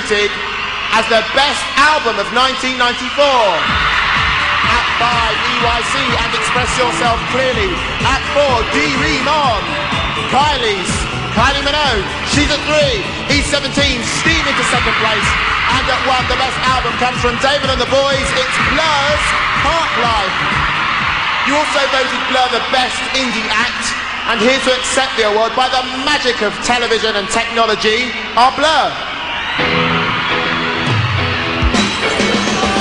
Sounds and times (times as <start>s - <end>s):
Speech: 0.0s - 3.6s, 4.7s - 9.6s, 10.3s - 20.4s, 21.4s - 29.0s
Music: 0.0s - 32.8s.